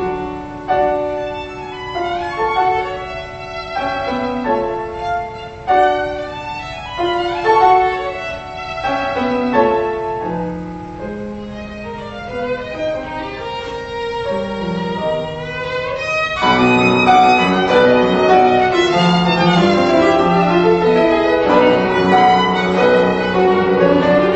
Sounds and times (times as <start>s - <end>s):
Violin, fiddle: 0.0s - 10.2s, 10.9s - 24.3s.